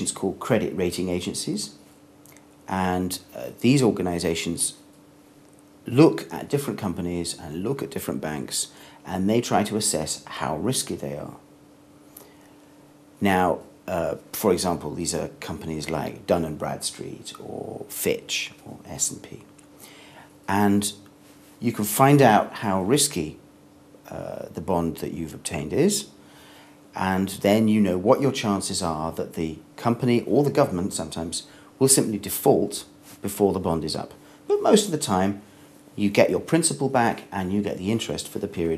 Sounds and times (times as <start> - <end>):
Speech: 0.0 - 1.8, 2.7 - 4.9, 5.9 - 11.5, 13.2 - 19.5, 20.5 - 23.4, 24.0 - 26.2, 27.0 - 38.7.